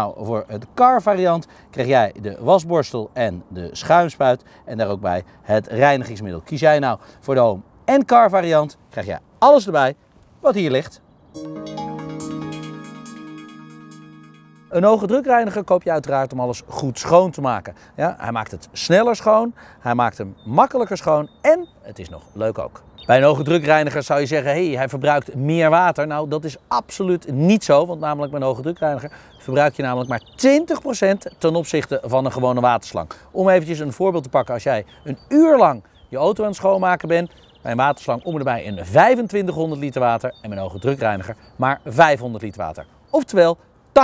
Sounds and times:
Speech: 0.0 - 11.0, 14.7 - 44.0
Music: 11.4 - 15.6.

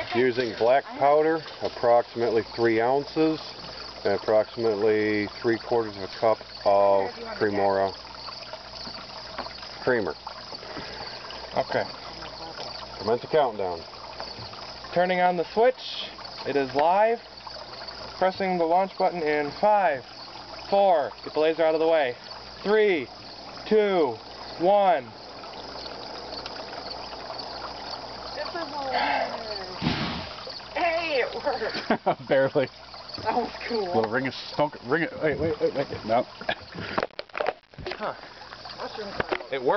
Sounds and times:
Explosion: 29.8 - 30.4.

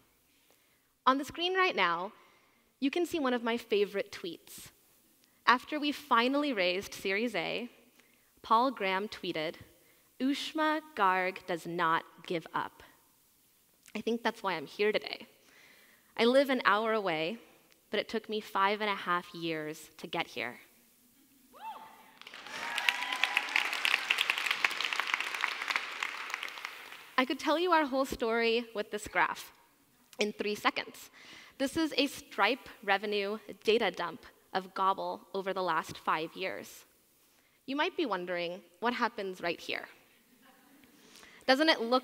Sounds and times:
Speech: 2.8 - 4.8, 5.5 - 7.8, 8.4 - 12.9, 13.9 - 15.3, 16.2 - 20.7, 27.2 - 29.5, 30.2 - 36.9, 37.7 - 40.9, 41.5 - 42.0.

